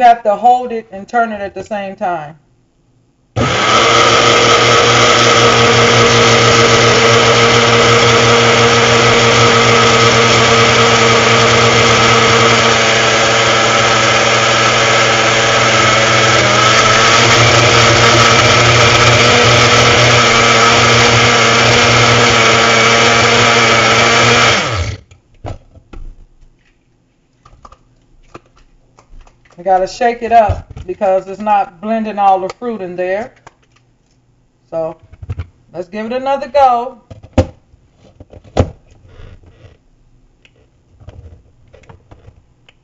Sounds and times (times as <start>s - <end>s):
Speech: 0.0s - 2.4s, 29.6s - 33.4s, 34.7s - 35.0s, 35.7s - 37.0s
Blender: 3.4s - 25.0s.